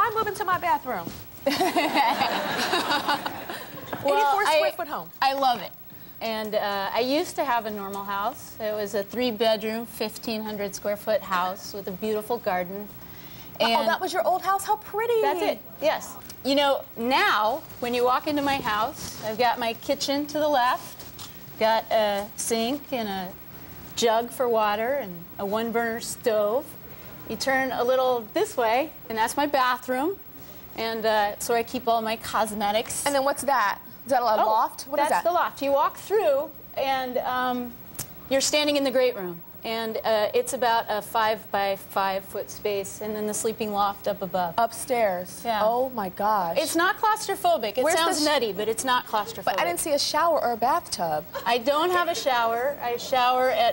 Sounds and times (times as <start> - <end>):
Female speech, woman speaking: 0.0 - 1.2, 4.0 - 12.9, 13.6 - 20.9, 21.6 - 23.4, 24.0 - 26.7, 27.3 - 30.2, 30.8 - 53.7.